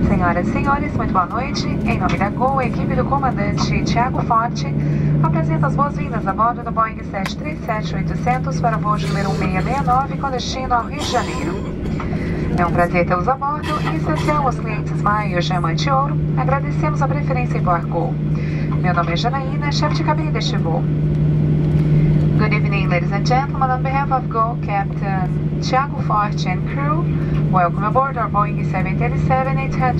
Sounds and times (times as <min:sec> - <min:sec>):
Female speech, woman speaking: 0:00.0 - 0:11.7, 0:12.5 - 0:20.9, 0:22.4 - 0:29.9
Narration, monologue: 0:00.0 - 0:25.3
Speech synthesizer: 0:08.3 - 0:11.7, 0:12.6 - 0:16.6.